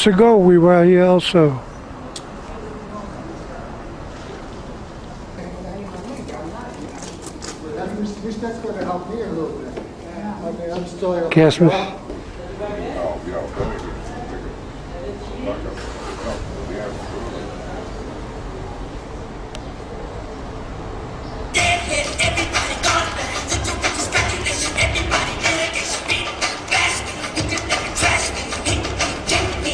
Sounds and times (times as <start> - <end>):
Inside, large room or hall: 0.0 - 29.7.